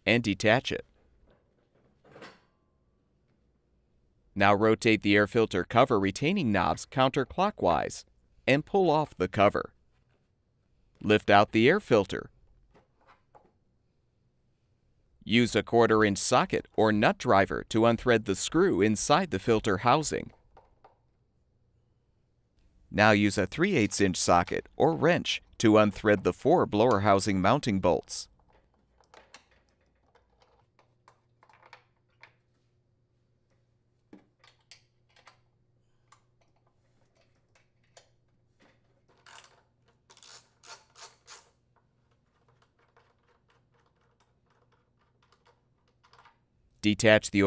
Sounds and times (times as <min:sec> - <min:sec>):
Speech: 0:00.0 - 0:00.9, 0:04.4 - 0:09.7, 0:11.0 - 0:12.3, 0:15.2 - 0:20.3, 0:22.9 - 0:28.3, 0:46.8 - 0:47.4.